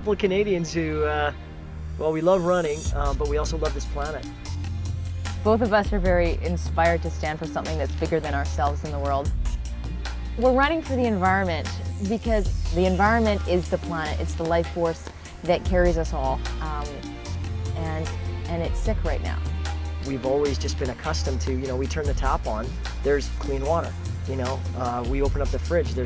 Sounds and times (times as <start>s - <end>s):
Music: 0.0s - 26.0s.